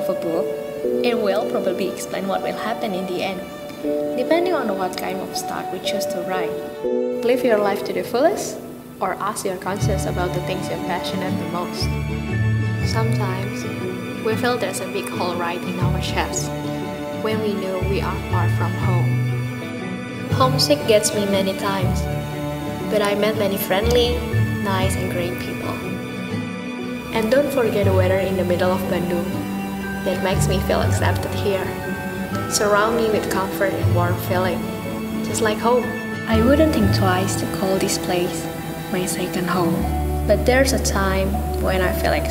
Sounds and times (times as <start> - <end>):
Speech: 0.0 - 3.4, 4.2 - 6.6, 7.2 - 11.9, 12.9 - 16.5, 17.2 - 19.1, 20.3 - 22.1, 22.9 - 26.0, 27.2 - 29.4, 30.0 - 31.8, 32.4 - 34.6, 35.3 - 42.3
Music: 0.0 - 42.3.